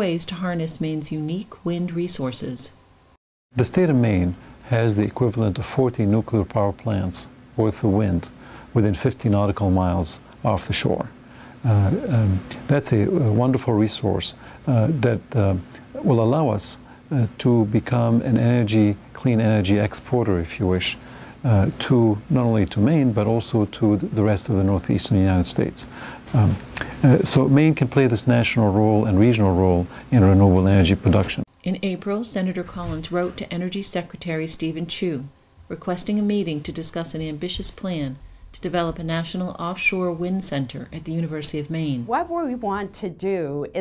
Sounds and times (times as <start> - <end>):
Speech: 0.0 - 2.8, 3.6 - 43.8.